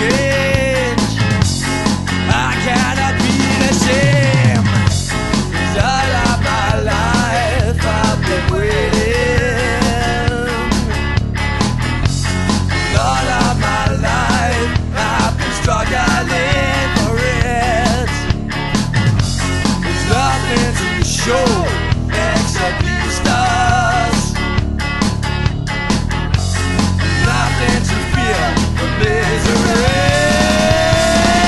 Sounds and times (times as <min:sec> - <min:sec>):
Rock music: 0:00.0 - 0:31.4.